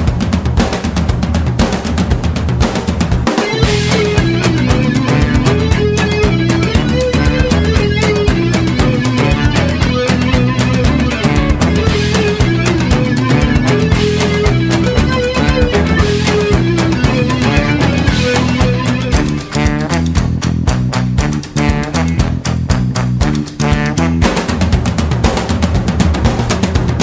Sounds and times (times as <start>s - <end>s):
Music: 0.0s - 27.0s.